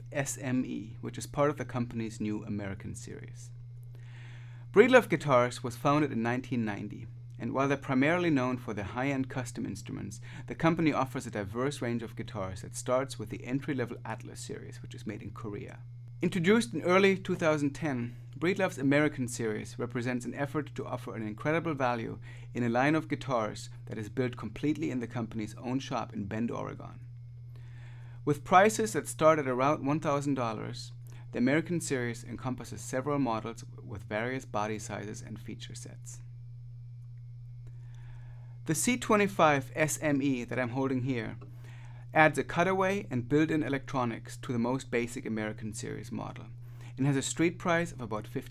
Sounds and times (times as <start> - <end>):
Speech: 0.0 - 3.5, 4.8 - 27.0, 28.3 - 36.2, 38.7 - 41.4, 42.1 - 48.5.